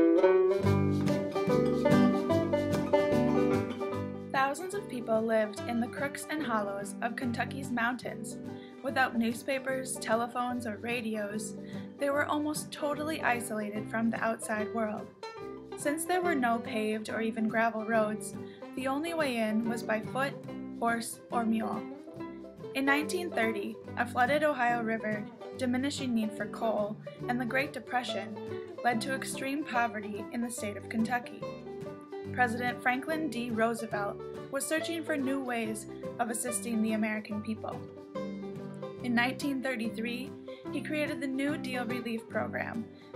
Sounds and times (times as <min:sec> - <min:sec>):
Music: 0:00.0 - 0:43.1
Speech: 0:04.4 - 0:15.1, 0:15.8 - 0:22.0, 0:22.8 - 0:31.5, 0:32.3 - 0:37.8, 0:39.0 - 0:42.8.